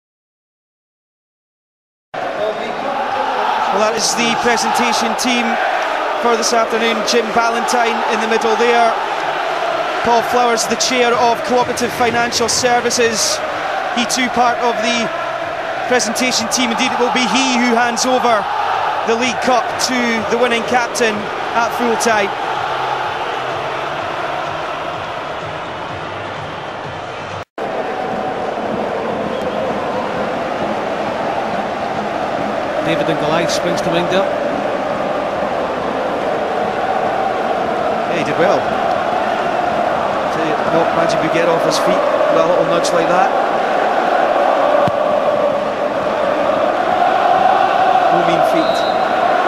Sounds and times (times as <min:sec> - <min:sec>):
Speech: 0:02.4 - 0:05.6, 0:06.2 - 0:09.0, 0:10.1 - 0:13.4, 0:14.0 - 0:15.1, 0:15.9 - 0:18.5, 0:19.1 - 0:22.3, 0:32.9 - 0:34.3, 0:38.1 - 0:38.7, 0:40.3 - 0:43.4, 0:48.1 - 0:48.8
Music: 0:15.1 - 0:16.2, 0:20.6 - 0:49.4.